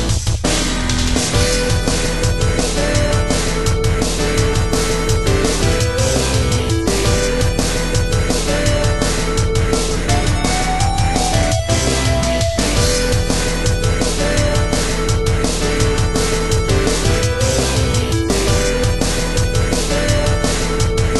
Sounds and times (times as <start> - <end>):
Music: 0.0 - 21.1.